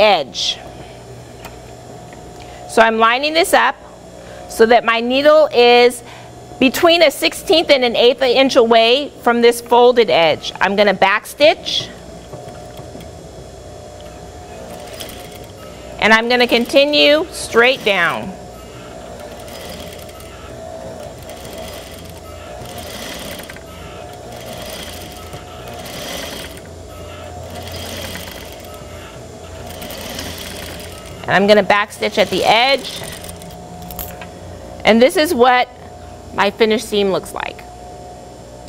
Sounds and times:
Speech: 6.6 - 11.9, 16.0 - 18.4, 31.3 - 32.9, 34.8 - 35.8, 36.4 - 37.7
Sewing machine: 14.6 - 15.6, 19.2 - 28.9, 29.5 - 31.3, 32.0 - 33.5.

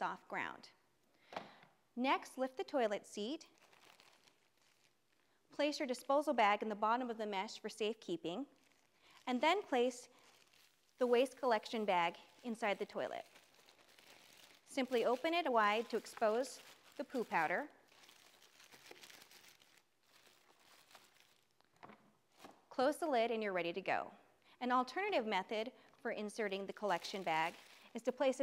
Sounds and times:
Speech: 0.0 - 0.8, 2.0 - 3.5, 5.6 - 8.5, 9.3 - 10.1, 11.0 - 13.3, 14.7 - 17.7, 22.8 - 28.4.

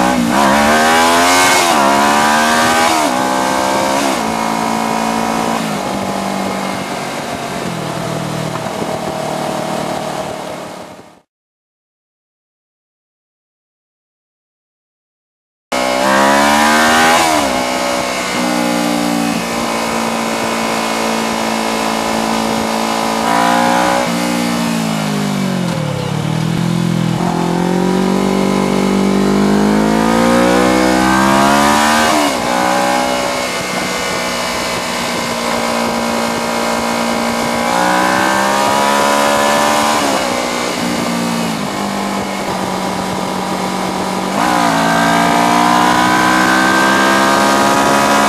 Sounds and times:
Race car, auto racing: 0.0 - 11.2, 15.8 - 48.2
Motorcycle: 0.0 - 11.3, 15.8 - 48.2.

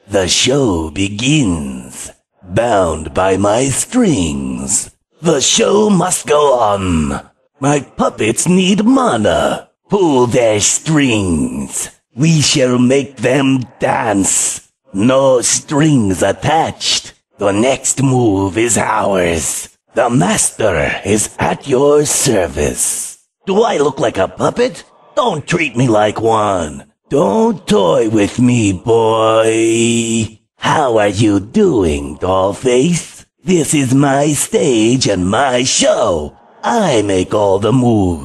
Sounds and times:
Speech: 0.0 - 38.2.

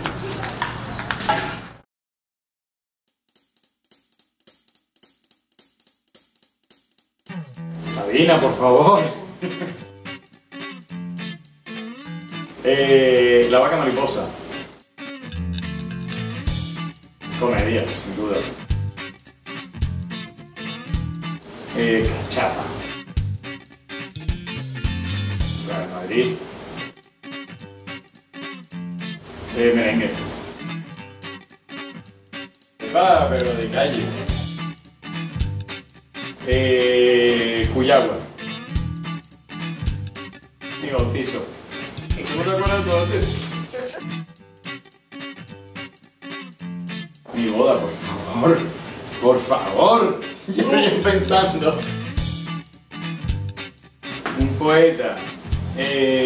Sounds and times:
Music: 3.3 - 56.2
Speech: 7.9 - 9.8, 12.6 - 14.4, 17.4 - 18.6, 21.7 - 22.8, 25.6 - 26.4, 29.5 - 30.3, 32.8 - 34.4, 36.4 - 38.3, 40.8 - 44.1, 47.3 - 52.0, 54.3 - 56.2.

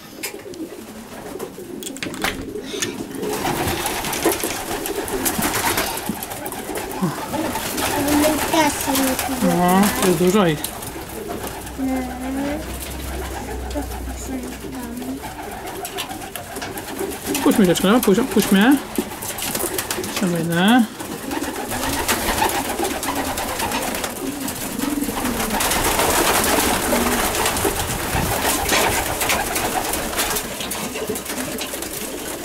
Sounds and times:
Pigeon, dove: 0.0 - 32.4.

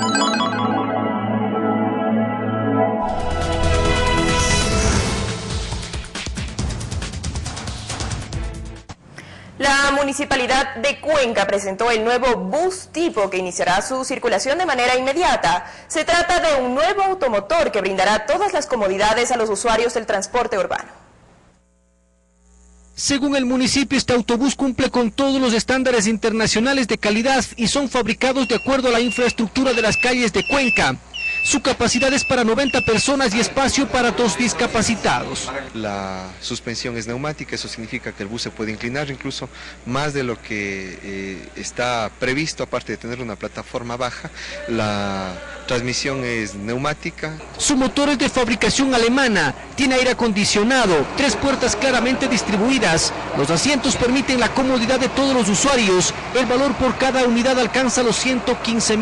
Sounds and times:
Speech: 23.0 - 59.0.

